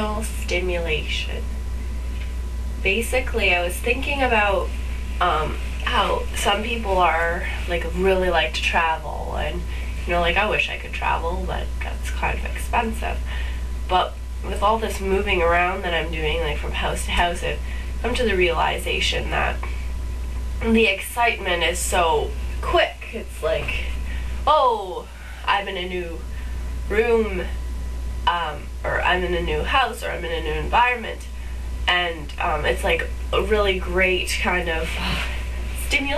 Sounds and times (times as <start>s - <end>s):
Speech: 0.0s - 1.5s, 2.8s - 19.7s, 20.6s - 27.6s, 28.3s - 36.1s.